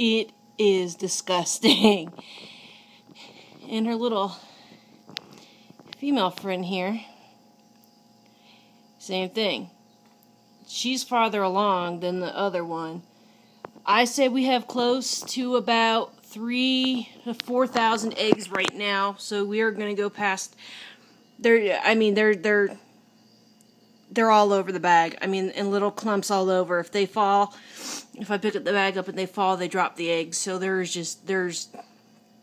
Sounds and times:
Speech: 0.0s - 2.2s, 3.7s - 4.4s, 6.0s - 7.1s, 9.0s - 9.7s, 10.7s - 13.0s, 13.9s - 20.5s, 21.4s - 22.8s, 24.1s - 27.5s, 28.2s - 31.8s.

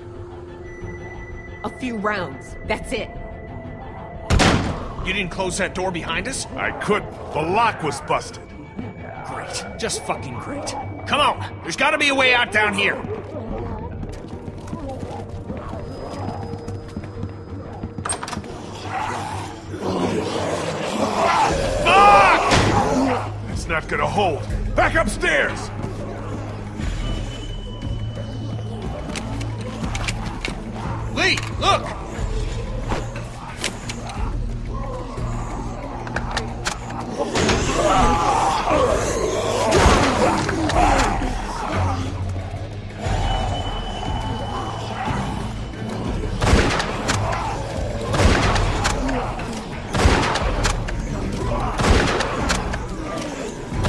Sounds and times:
Music: 0.0s - 53.8s.

